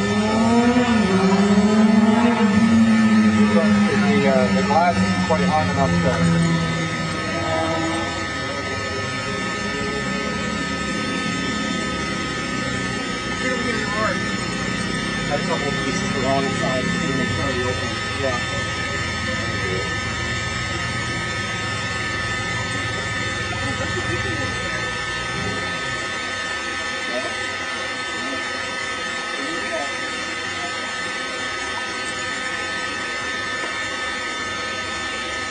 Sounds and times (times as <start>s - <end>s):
Speech: 3.4s - 6.5s, 11.7s - 14.3s, 15.2s - 20.0s, 26.8s - 28.5s, 29.2s - 32.0s.